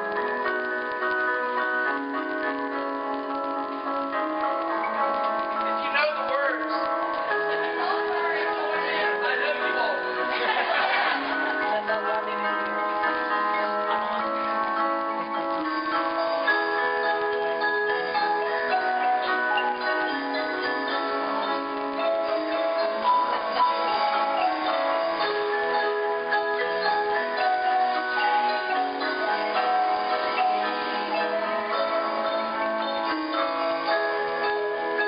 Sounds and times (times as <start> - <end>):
Percussion: 0.0 - 35.0.